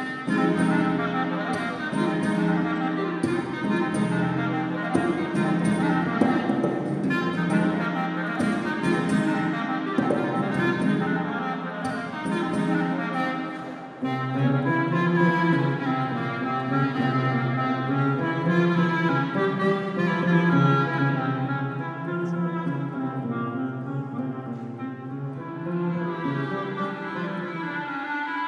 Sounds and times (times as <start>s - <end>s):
Acoustic guitar: 0.0s - 28.4s
Strum: 0.0s - 28.4s.